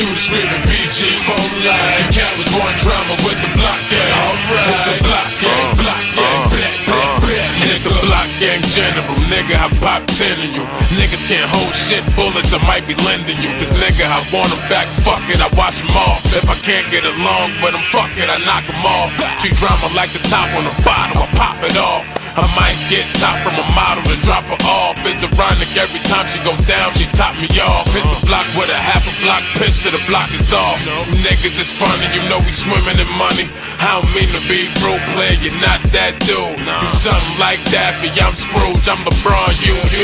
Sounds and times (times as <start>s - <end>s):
Music: 0.0s - 40.0s.